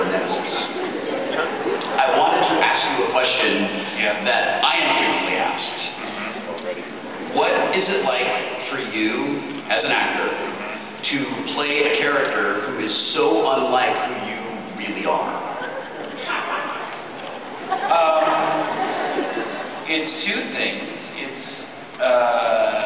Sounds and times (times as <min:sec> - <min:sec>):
Speech: 0:00.0 - 0:15.6, 0:17.9 - 0:18.6, 0:19.9 - 0:22.8.